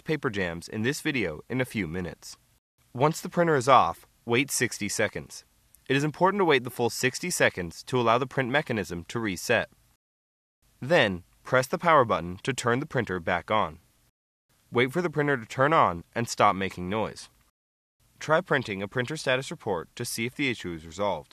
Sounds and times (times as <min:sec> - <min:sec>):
Speech: 0:00.0 - 0:09.7, 0:10.8 - 0:13.8, 0:14.7 - 0:17.4, 0:18.2 - 0:21.3.